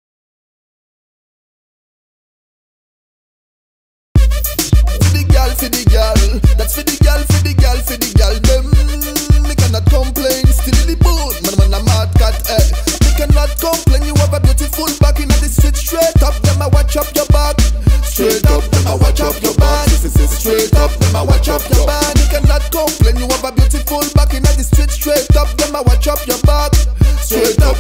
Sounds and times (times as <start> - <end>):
Music: 4.2 - 27.8.